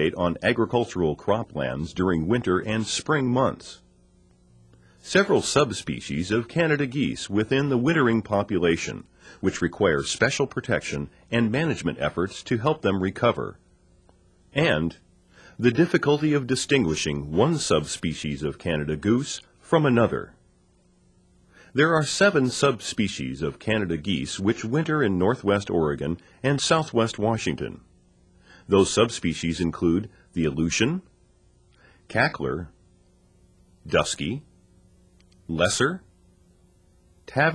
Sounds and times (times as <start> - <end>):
Speech: 0.0 - 3.9, 5.0 - 13.6, 14.5 - 20.4, 21.8 - 27.9, 28.7 - 31.2, 32.1 - 32.8, 33.8 - 34.5, 35.4 - 36.1, 37.2 - 37.5.